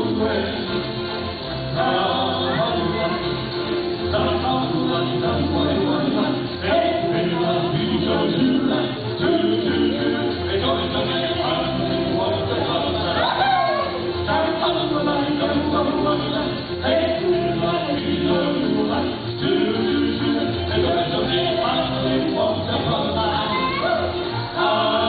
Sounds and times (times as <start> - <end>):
Music: 0.0 - 25.0.